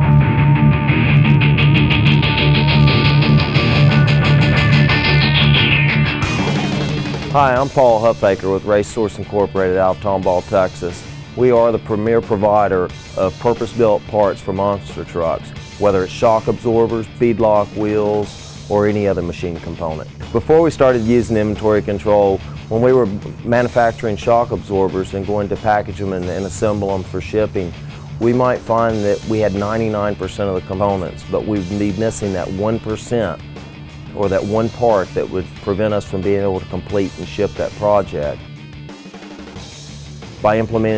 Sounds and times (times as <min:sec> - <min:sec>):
Music: 0:00.0 - 0:40.9
Speech: 0:07.3 - 0:33.4, 0:34.2 - 0:38.4, 0:40.4 - 0:40.9.